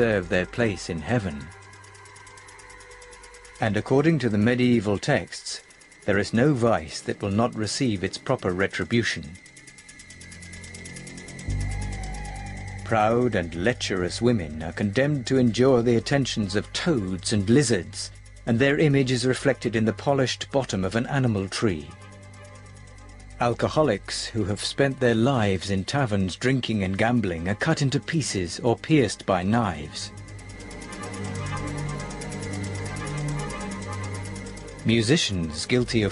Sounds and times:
Speech: 0.0 - 1.5, 3.6 - 9.4, 12.9 - 22.0, 23.4 - 30.1, 34.8 - 36.1.

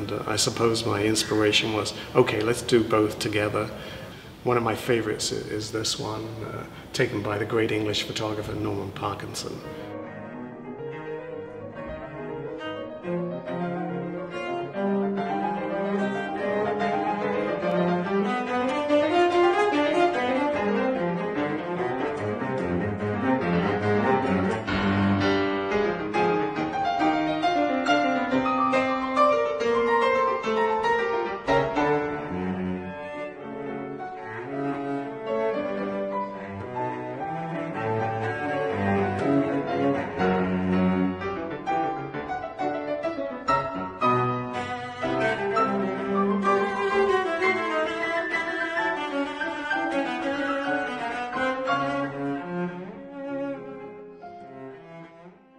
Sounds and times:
Bowed string instrument: 0.0 - 55.5.

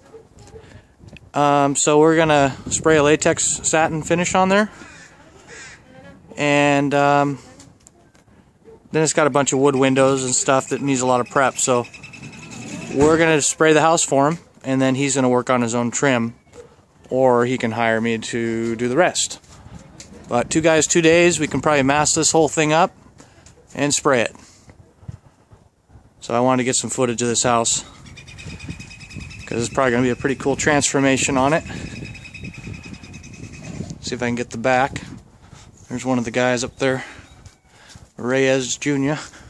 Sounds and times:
Outside, rural or natural: 0.0 - 39.5
Speech: 9.0 - 11.8, 12.9 - 16.4, 20.3 - 22.9, 23.8 - 24.4, 26.2 - 27.9, 29.5 - 31.7, 34.0 - 35.1, 35.9 - 37.1, 38.2 - 39.3.

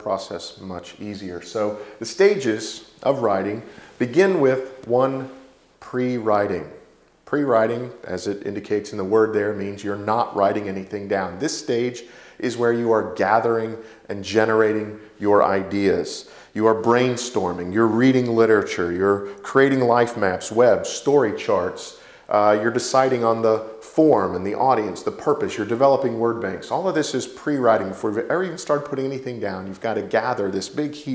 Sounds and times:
Speech: 0.0 - 31.1.

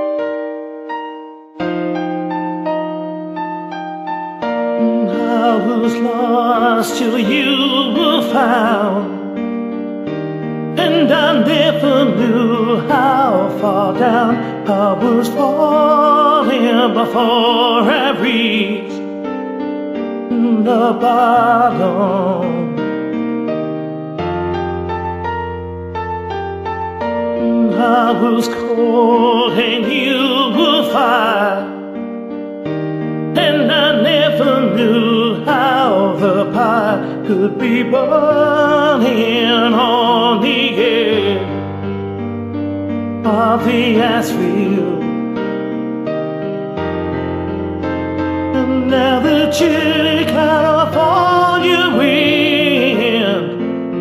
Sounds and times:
Music: 0.0 - 54.0
Male singing: 4.8 - 9.2, 10.8 - 19.0, 20.3 - 22.7, 27.4 - 31.8, 33.4 - 41.5, 43.2 - 45.2, 48.6 - 54.0.

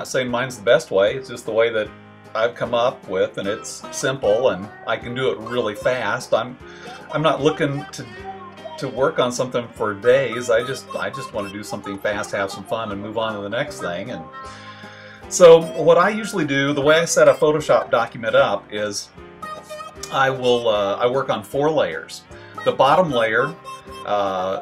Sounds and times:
Speech: 0.0 - 14.3, 15.3 - 19.1, 20.0 - 24.6
Music: 0.0 - 24.6.

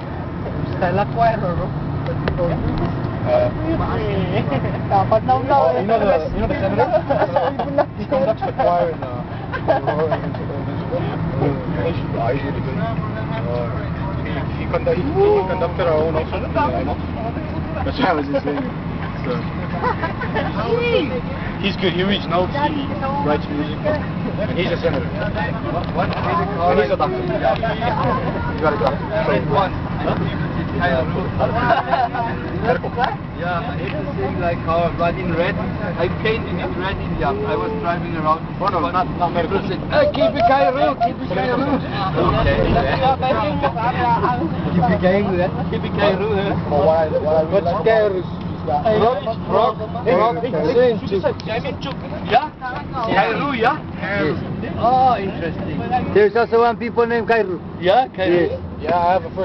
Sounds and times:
Vehicle: 0.0 - 59.4.

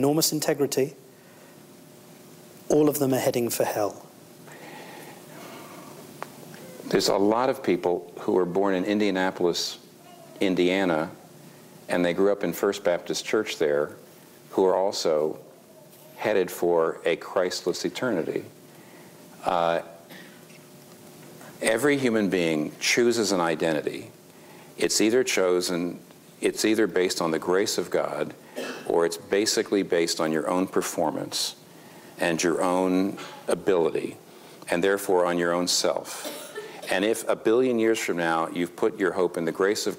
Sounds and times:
Speech: 0.0 - 1.0, 2.7 - 4.1, 6.8 - 9.8, 10.4 - 11.2, 11.9 - 15.5, 16.2 - 18.5, 19.4 - 20.0, 21.6 - 24.2, 24.8 - 31.6, 32.2 - 36.3, 36.9 - 39.9.

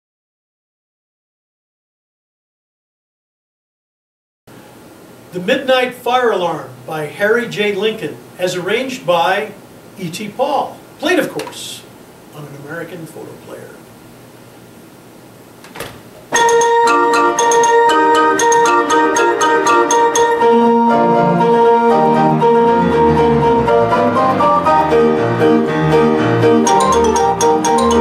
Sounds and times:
Music: 16.4 - 28.0.

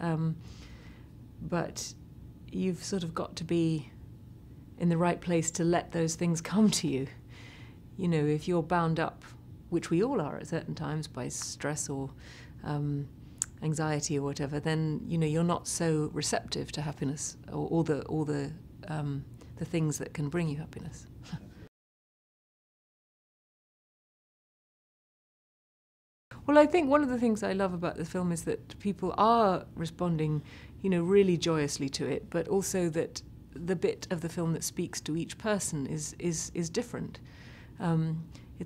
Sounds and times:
Speech: 0.0 - 0.4, 1.4 - 4.0, 4.8 - 7.2, 8.0 - 21.1, 26.4 - 37.2, 37.8 - 38.6
Inside, small room: 0.0 - 21.7, 26.3 - 38.6.

